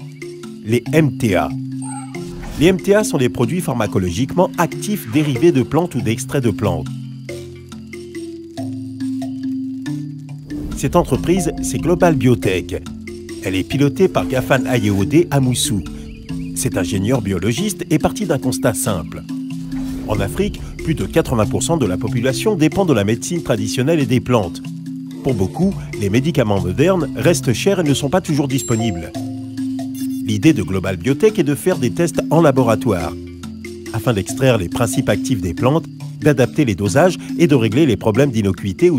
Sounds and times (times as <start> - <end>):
Music: 0.0 - 38.9
Speech: 0.7 - 1.6, 2.6 - 6.9, 10.8 - 16.0, 16.6 - 19.3, 20.1 - 24.7, 25.3 - 29.2, 30.3 - 33.2, 34.0 - 38.9.